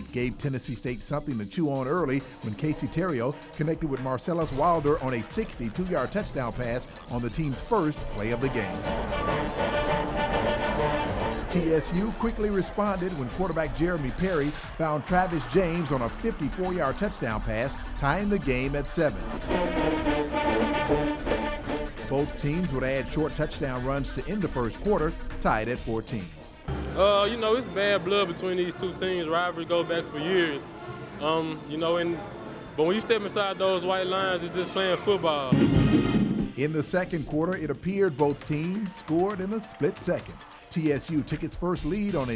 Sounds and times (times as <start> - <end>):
Speech: 0.0 - 8.8, 11.5 - 19.2, 22.1 - 26.4, 36.6 - 42.3
Inside, large room or hall: 0.0 - 42.3
Music: 0.0 - 42.3.